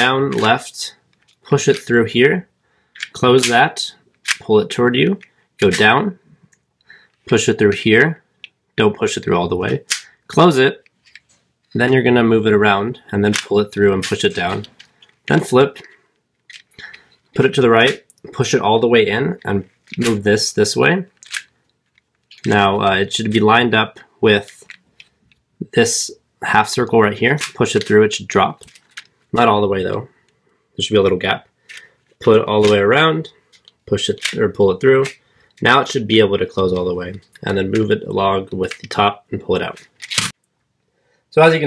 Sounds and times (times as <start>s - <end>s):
Speech: 0.0s - 2.5s, 3.1s - 6.2s, 7.3s - 10.8s, 11.8s - 15.9s, 17.4s - 21.2s, 22.4s - 24.7s, 25.6s - 28.7s, 29.3s - 30.2s, 30.8s - 31.5s, 32.2s - 39.8s, 41.3s - 41.6s.